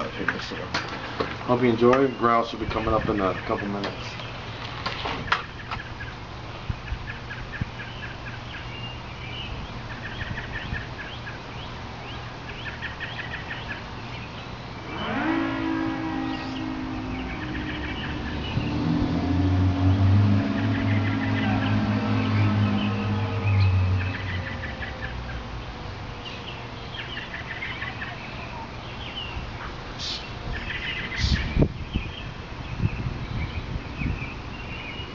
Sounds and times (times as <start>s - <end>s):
Civil defense siren: 14.8s - 25.6s.